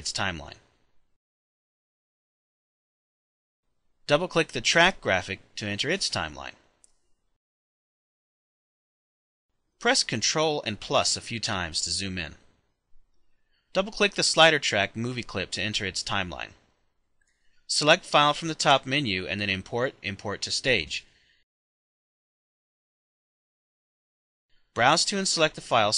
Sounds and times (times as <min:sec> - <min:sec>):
Speech: 0:00.0 - 0:00.7, 0:04.0 - 0:06.7, 0:09.8 - 0:12.5, 0:13.8 - 0:16.7, 0:17.7 - 0:21.1, 0:24.8 - 0:25.9.